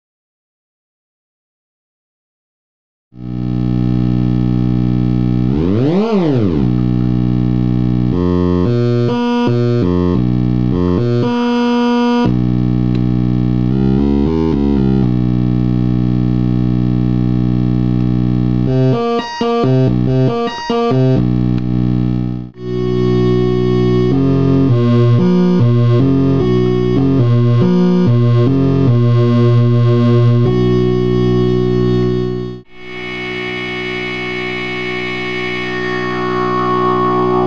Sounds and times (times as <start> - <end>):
Synthesizer: 3.3 - 15.7, 18.5 - 37.4.